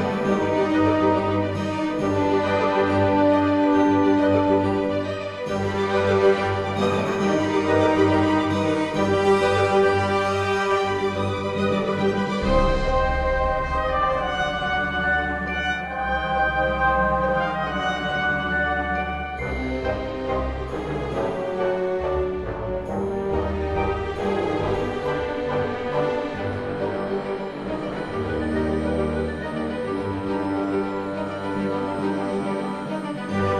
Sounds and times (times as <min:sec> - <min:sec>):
Music: 0:00.0 - 0:33.5.